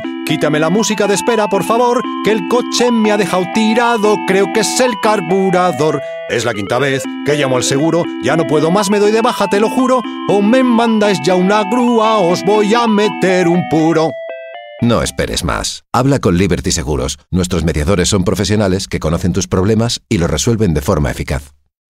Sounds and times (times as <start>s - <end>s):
Speech: 0.0s - 14.2s, 14.8s - 21.6s
Music: 0.0s - 15.4s.